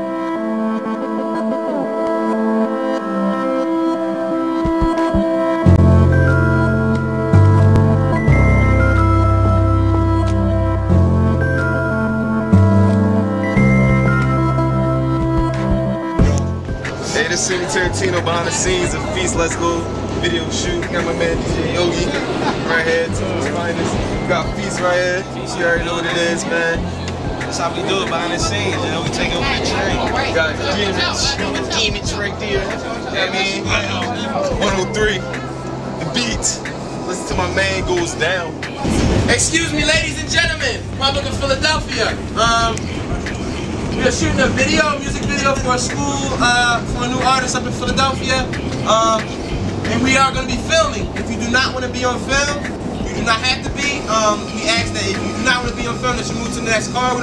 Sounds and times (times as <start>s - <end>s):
Music: 0.0s - 57.2s
Speech: 17.0s - 35.4s, 36.0s - 42.8s, 44.0s - 57.2s.